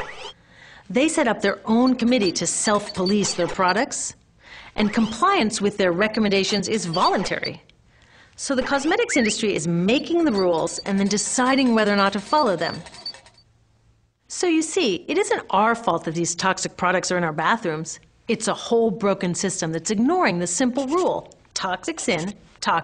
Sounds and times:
Speech: 0.9 - 4.2, 4.8 - 7.7, 8.4 - 12.8, 14.3 - 22.8.

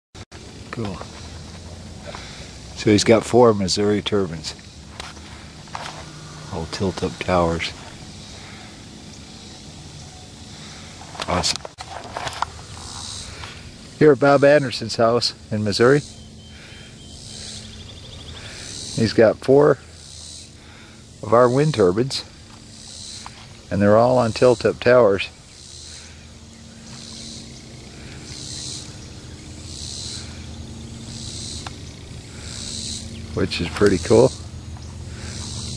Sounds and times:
Wind: 0.2 - 35.7
Speech: 0.7 - 1.1, 2.8 - 4.6, 6.5 - 7.8, 14.0 - 16.1, 19.0 - 19.8, 21.2 - 22.3, 23.7 - 25.3, 33.4 - 34.4.

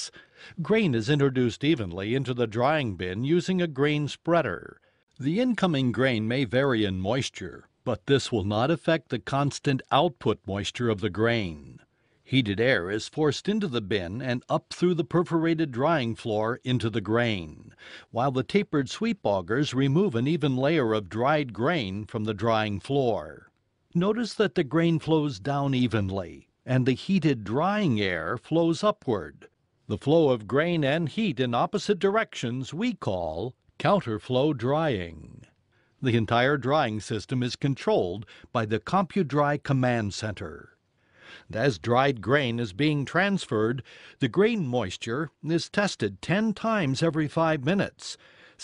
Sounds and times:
Speech: 0.0 - 40.8, 41.4 - 48.6.

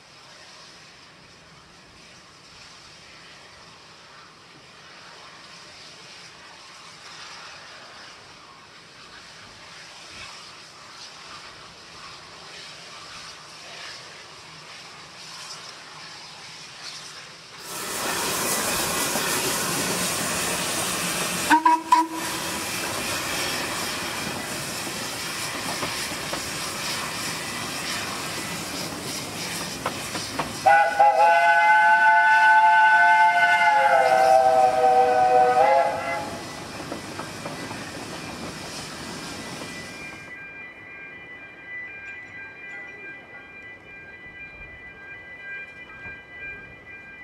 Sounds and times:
Railroad car, train wagon: 0.0 - 47.2
Train: 0.0 - 47.2.

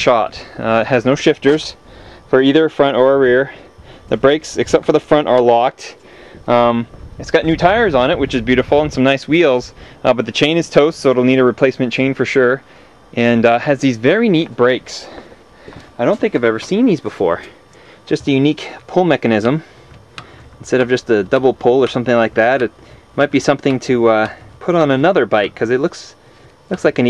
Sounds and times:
Speech: 0.0 - 15.2, 16.0 - 19.7, 20.6 - 27.1.

